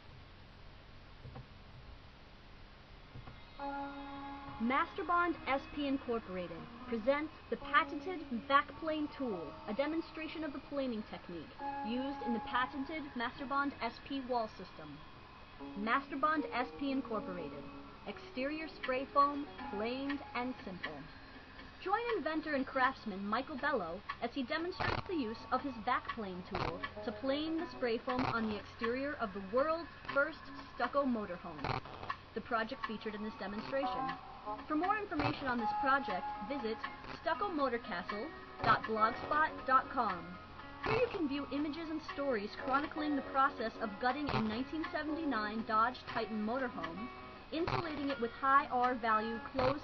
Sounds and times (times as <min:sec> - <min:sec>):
Music: 0:03.2 - 0:49.8
Speech: 0:04.6 - 0:15.0, 0:15.8 - 0:21.1, 0:21.8 - 0:31.7, 0:32.4 - 0:49.8.